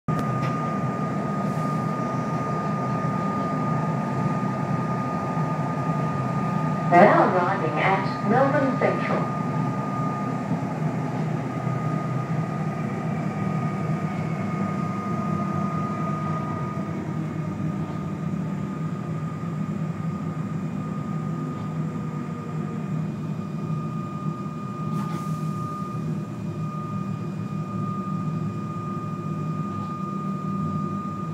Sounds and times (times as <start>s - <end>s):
Railroad car, train wagon: 0.1s - 31.3s
Subway, metro, underground: 0.1s - 31.3s
Train: 0.1s - 31.3s.